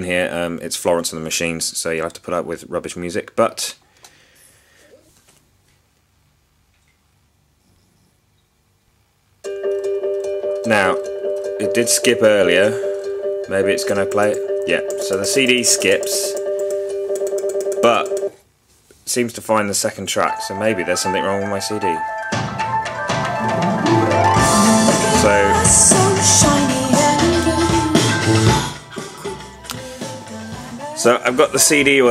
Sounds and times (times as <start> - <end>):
Speech: 0.0 - 3.8, 11.6 - 12.8, 13.5 - 16.4, 19.0 - 22.0, 31.0 - 32.1
Music: 20.2 - 32.1.